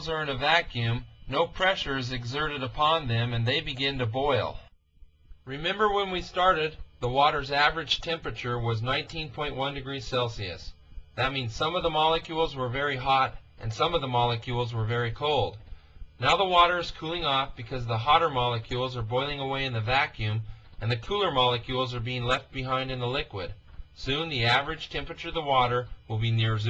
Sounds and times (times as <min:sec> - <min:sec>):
Speech: 0:00.0 - 0:04.7, 0:05.4 - 0:26.7.